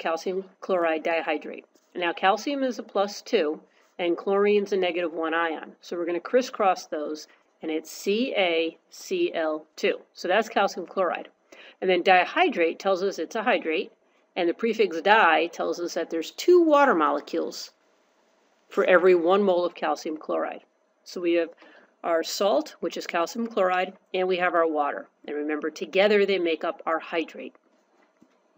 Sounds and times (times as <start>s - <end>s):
Speech: 0.0s - 17.7s, 18.8s - 27.5s.